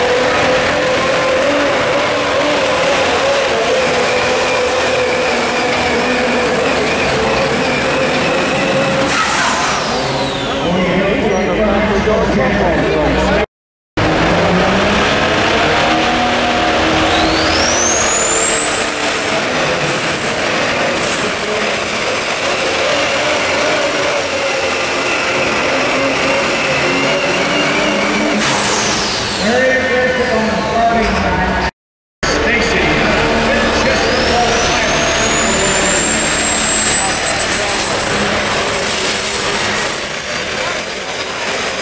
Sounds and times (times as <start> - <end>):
Outside, urban or manmade: 0.0 - 41.8
Vehicle: 0.0 - 41.8.